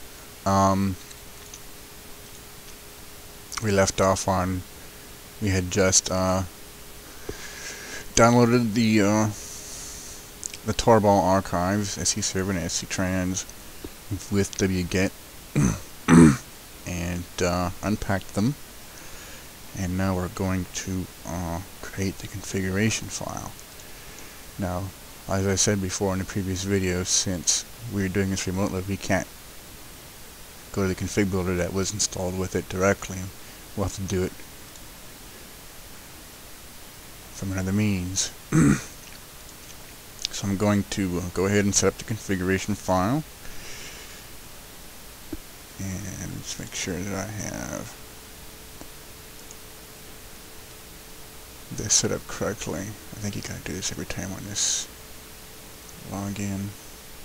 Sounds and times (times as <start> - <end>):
Speech: 0.5 - 1.0, 3.6 - 4.6, 5.4 - 6.5, 8.2 - 9.4, 10.6 - 13.5, 14.1 - 18.6, 19.8 - 23.6, 24.6 - 29.3, 30.7 - 34.4, 37.4 - 38.8, 40.3 - 43.3, 45.8 - 48.0, 51.7 - 54.9, 56.0 - 56.8.